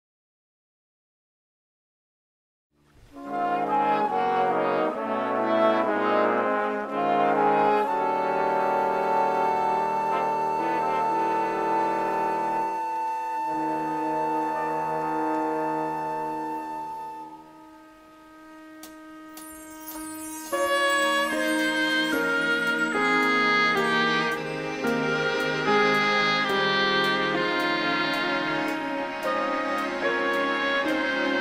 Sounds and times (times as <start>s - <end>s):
Trumpet: 3.0s - 31.4s
Trombone: 3.1s - 31.4s.